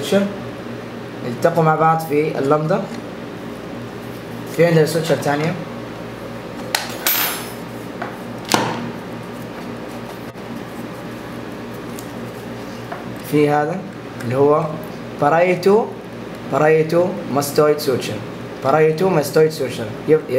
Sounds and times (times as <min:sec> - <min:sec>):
Speech: 0:00.0 - 0:00.4, 0:01.2 - 0:03.0, 0:04.5 - 0:05.7, 0:13.2 - 0:20.3.